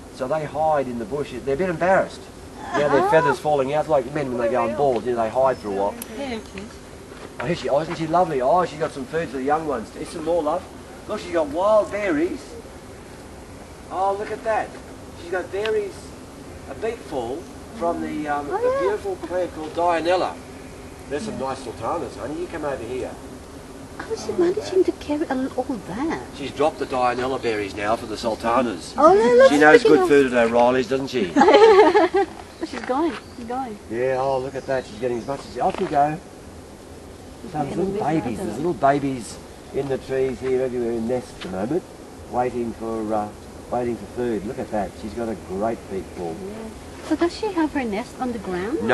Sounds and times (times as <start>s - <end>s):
Speech: 0.2s - 6.7s, 7.4s - 12.5s, 16.7s - 20.4s, 21.1s - 23.2s, 24.0s - 31.4s, 32.6s - 36.2s, 37.5s - 48.9s.